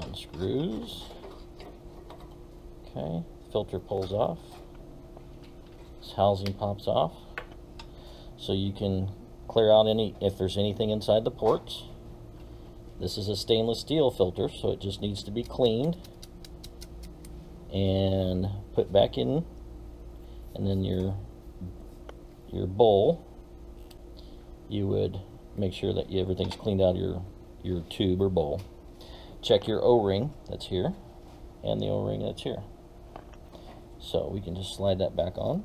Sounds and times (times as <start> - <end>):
Speech: 0.0 - 1.1, 2.9 - 4.6, 6.0 - 7.2, 8.4 - 12.0, 13.0 - 16.1, 17.7 - 19.5, 20.6 - 21.8, 22.5 - 23.2, 24.7 - 28.7, 29.4 - 31.0, 31.6 - 32.7, 34.0 - 35.6.